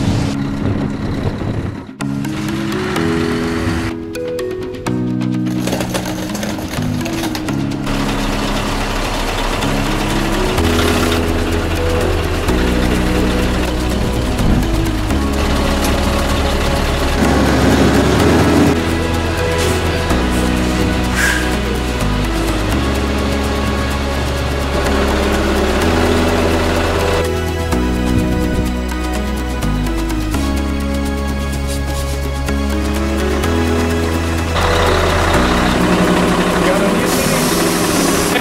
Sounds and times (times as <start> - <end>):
Truck: 0.0 - 38.4.